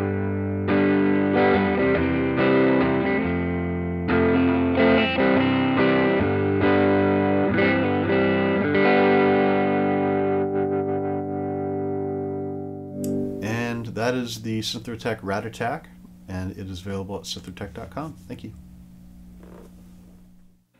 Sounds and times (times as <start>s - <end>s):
Effects unit: 0.0s - 14.4s, 17.6s - 20.7s
Guitar: 0.0s - 18.7s
Distortion: 0.0s - 20.7s
Speech: 13.4s - 18.6s.